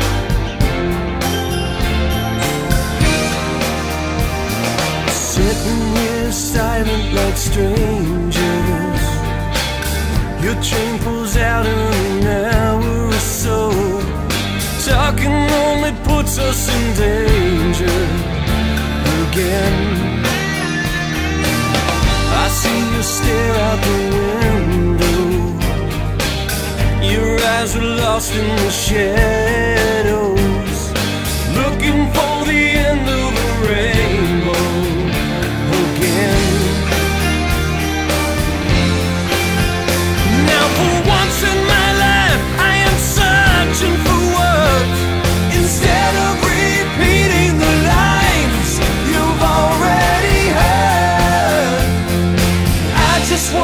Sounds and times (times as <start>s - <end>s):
Music: 0.0s - 53.6s.